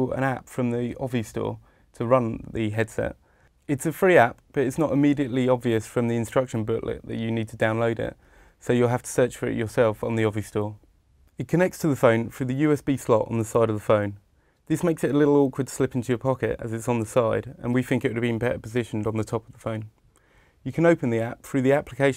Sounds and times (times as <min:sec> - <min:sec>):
Speech: 0:00.0 - 0:10.8, 0:11.4 - 0:20.0, 0:20.6 - 0:22.1.